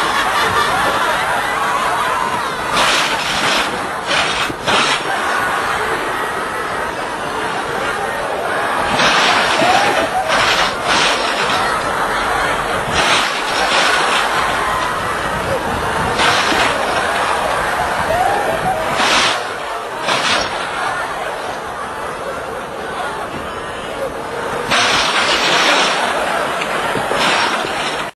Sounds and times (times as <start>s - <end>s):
Speech: 5.0s - 28.1s.